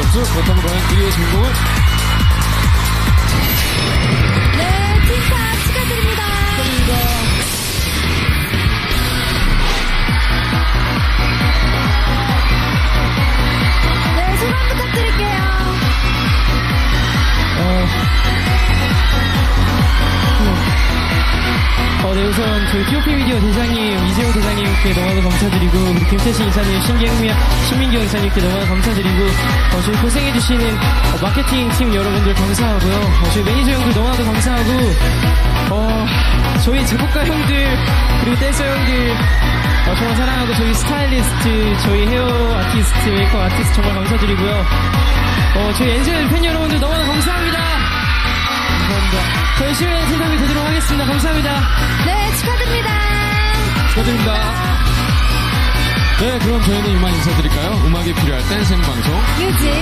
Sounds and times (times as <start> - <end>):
Music: 0.0 - 59.8.